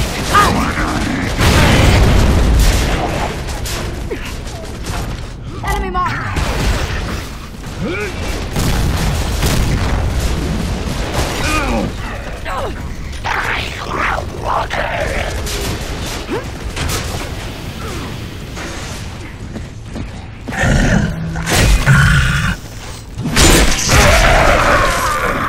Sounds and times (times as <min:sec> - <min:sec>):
Speech: 0:05.5 - 0:06.4.